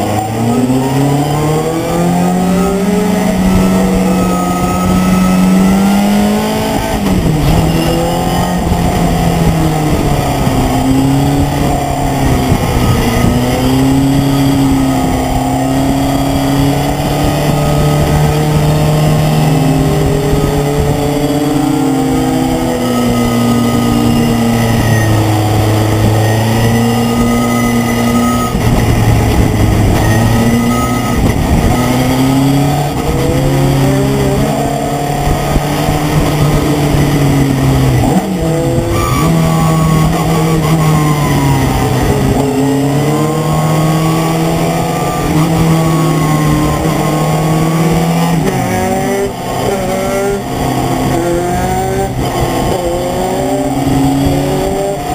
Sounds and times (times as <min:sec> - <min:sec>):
Vehicle: 0:00.0 - 0:55.1.